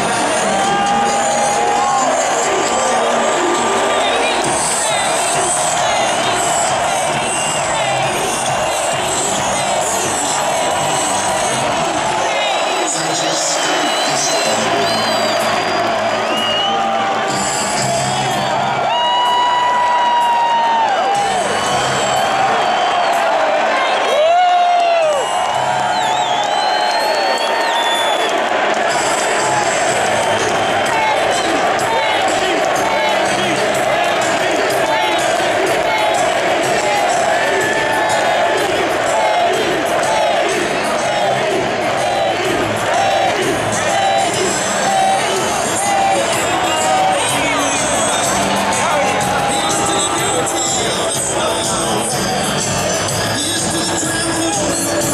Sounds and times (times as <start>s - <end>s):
Crowd: 0.0s - 55.1s
Music: 0.0s - 55.1s.